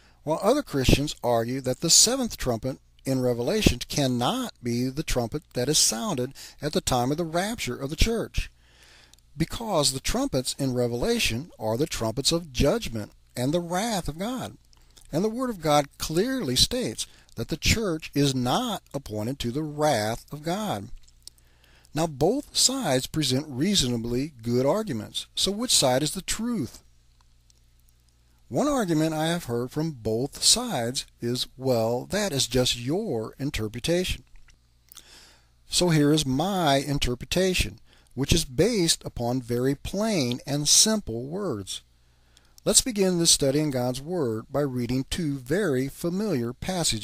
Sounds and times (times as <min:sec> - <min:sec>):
Speech: 0:00.2 - 0:08.5, 0:09.4 - 0:21.0, 0:21.9 - 0:26.8, 0:28.5 - 0:34.3, 0:35.7 - 0:41.9, 0:42.6 - 0:47.0.